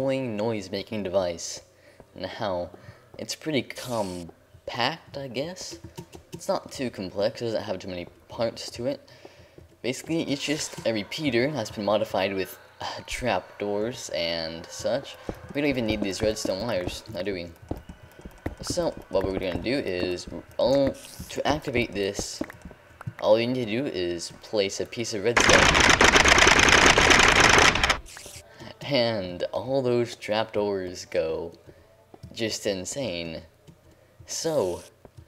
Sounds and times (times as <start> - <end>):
Speech: 0.0 - 5.8, 6.4 - 9.0, 9.8 - 17.6, 18.6 - 22.4, 23.2 - 25.4, 28.6 - 31.6, 32.3 - 33.5, 34.3 - 34.9.